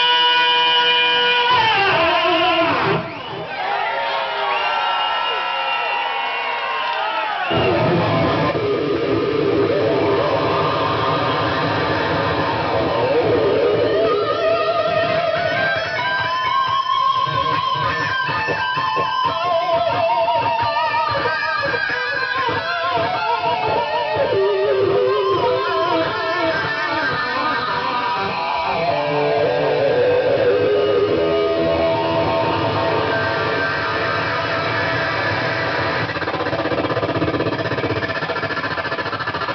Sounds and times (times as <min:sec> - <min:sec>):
Bass guitar: 0:00.0 - 0:03.4, 0:07.5 - 0:39.5.